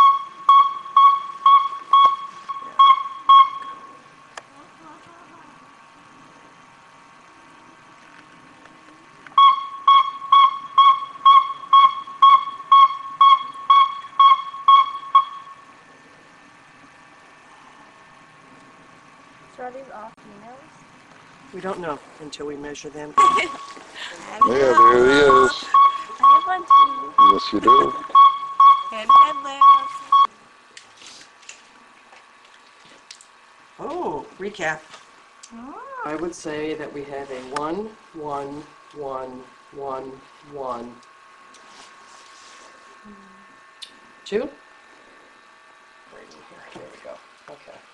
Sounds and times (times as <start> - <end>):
Speech: 24.3 - 25.7, 26.6 - 28.0.